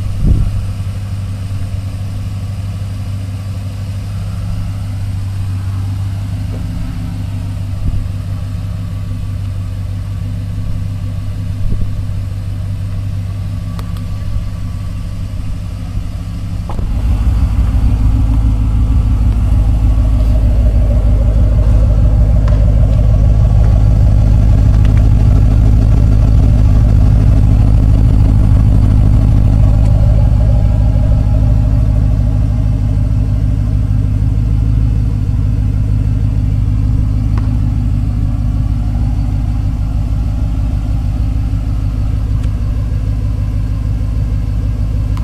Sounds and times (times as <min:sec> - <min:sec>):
Car: 0:00.0 - 0:45.2
Outside, urban or manmade: 0:00.0 - 0:45.2.